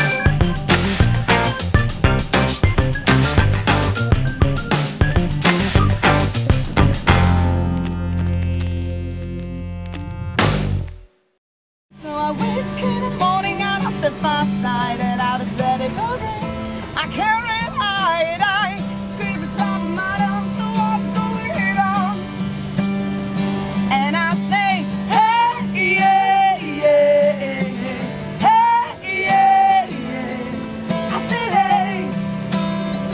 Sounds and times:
Music: 0.0s - 33.1s.

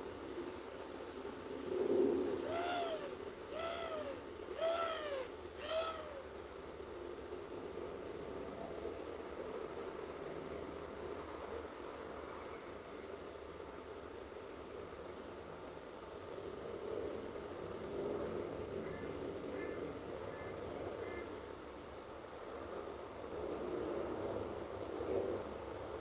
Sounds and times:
Outside, rural or natural: 0.0s - 26.0s.

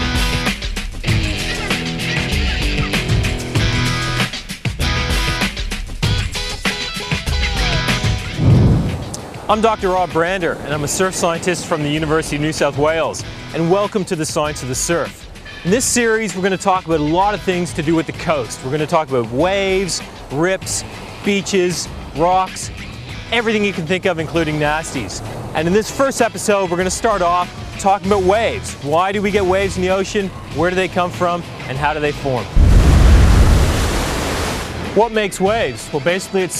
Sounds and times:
Music: 0.0s - 33.7s, 34.7s - 36.5s
Speech: 7.4s - 8.0s, 9.5s - 22.7s, 23.3s - 32.6s, 34.9s - 36.5s.

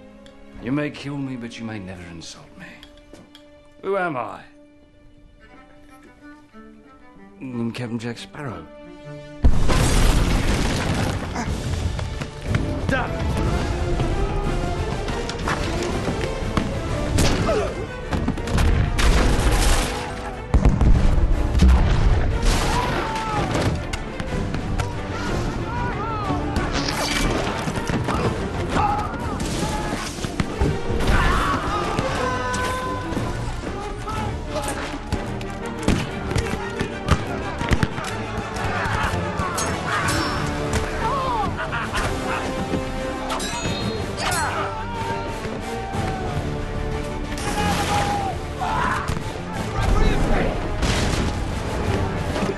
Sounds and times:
Music: 0.0s - 52.5s.

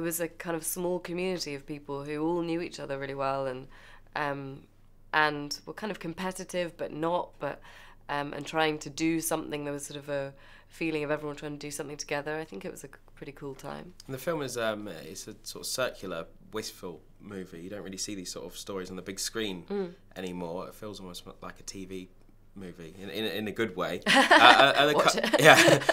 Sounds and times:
Speech: 12.4s - 25.9s.

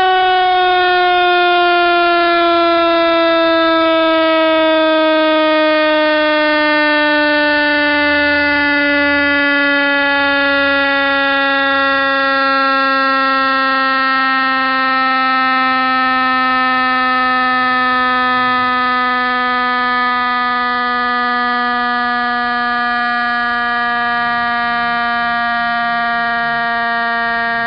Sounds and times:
Siren: 0.0s - 27.6s.

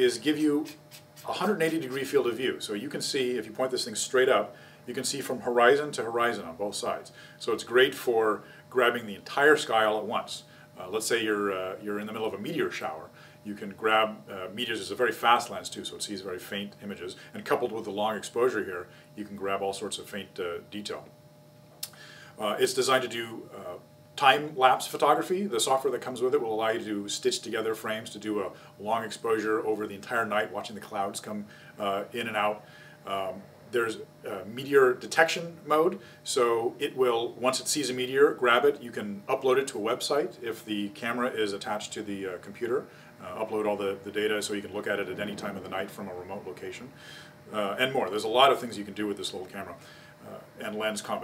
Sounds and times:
Speech: 0.0s - 21.1s, 22.4s - 51.2s.

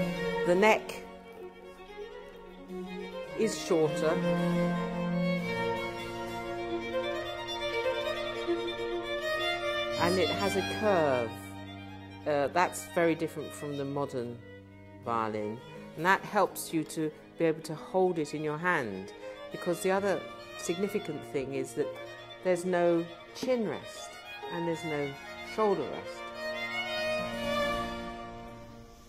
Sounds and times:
Violin, fiddle: 0.0s - 29.0s
Speech: 0.5s - 1.0s, 3.4s - 4.2s, 10.0s - 11.5s, 12.3s - 14.4s, 15.1s - 21.9s, 22.5s - 26.2s.

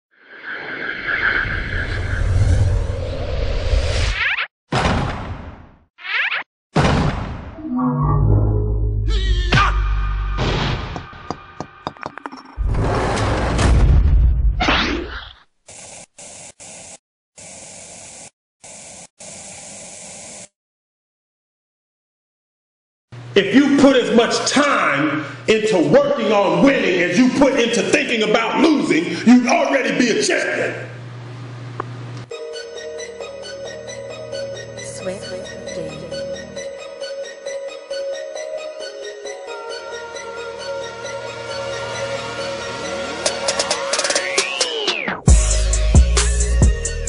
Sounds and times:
Whack, thwack: 4.7s - 5.6s, 6.8s - 7.5s, 10.4s - 11.2s.

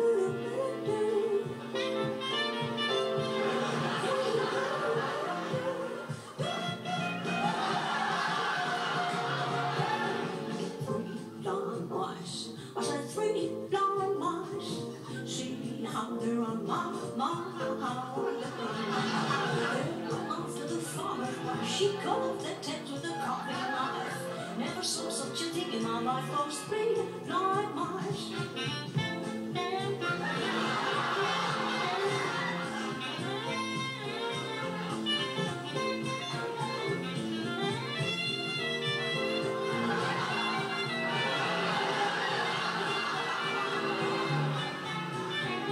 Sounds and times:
Music: 0.0s - 45.7s.

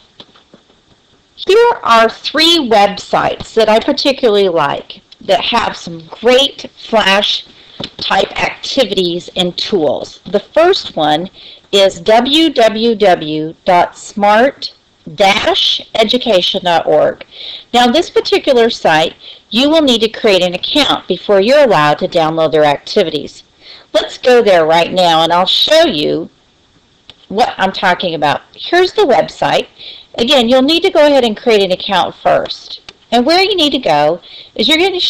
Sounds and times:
Speech: 1.4s - 26.4s, 27.1s - 35.1s.

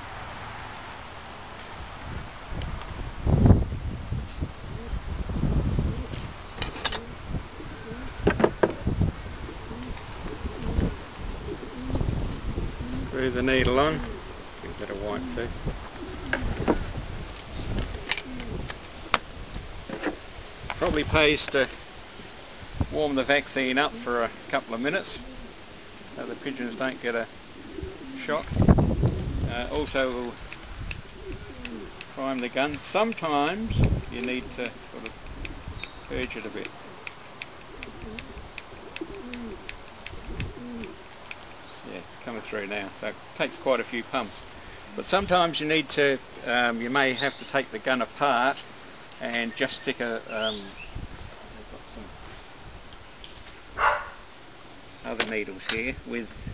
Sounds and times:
Coo: 4.6s - 19.2s, 23.7s - 30.4s, 31.0s - 32.0s, 33.4s - 41.1s
Bird vocalization, bird call, bird song: 35.7s - 36.2s, 47.0s - 47.6s, 49.2s - 51.0s.

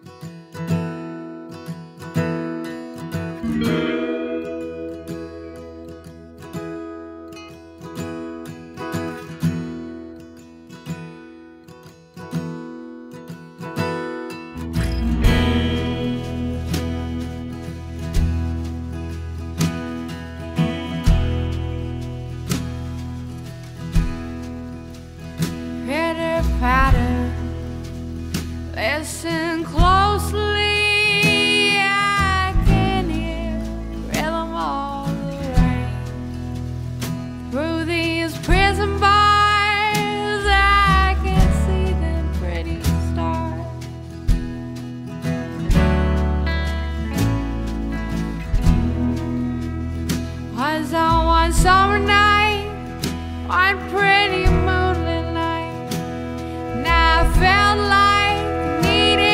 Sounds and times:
Music: 0.0s - 59.3s.

